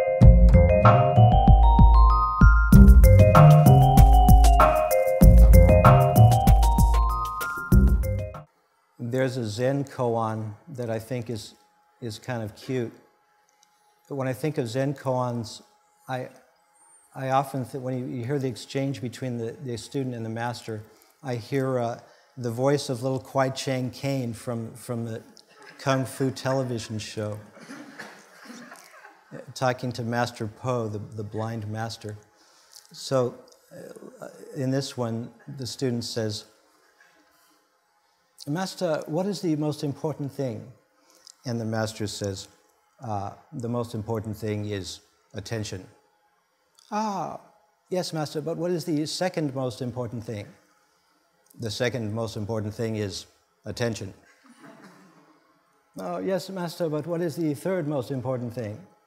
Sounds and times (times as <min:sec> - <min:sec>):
Speech: 0:09.0 - 0:13.0, 0:14.1 - 0:16.4, 0:17.2 - 0:27.5, 0:29.3 - 0:32.2, 0:32.9 - 0:36.6, 0:38.4 - 0:40.8, 0:41.4 - 0:45.9, 0:46.8 - 0:50.6, 0:51.5 - 0:54.2, 0:56.0 - 0:58.9.